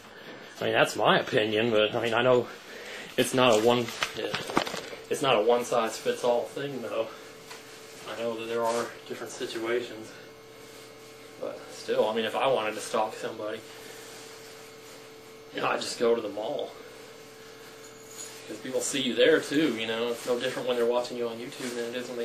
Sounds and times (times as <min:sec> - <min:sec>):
Speech: 0:00.6 - 0:02.6, 0:03.2 - 0:04.5, 0:05.1 - 0:07.2, 0:08.0 - 0:10.3, 0:11.4 - 0:13.7, 0:15.5 - 0:16.8, 0:18.5 - 0:22.2.